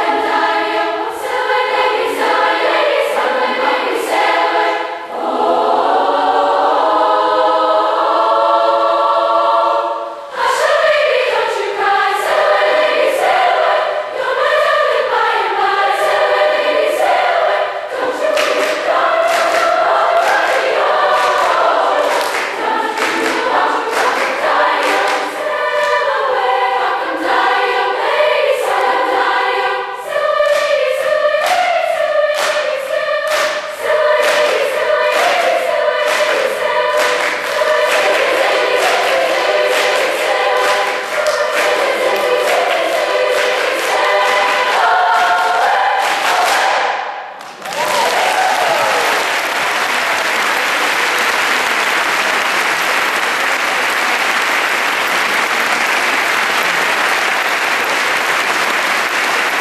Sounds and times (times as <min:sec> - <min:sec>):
Choir: 0:00.0 - 0:59.6
Gospel music: 0:00.0 - 0:59.6
Orchestra: 0:00.0 - 0:59.6.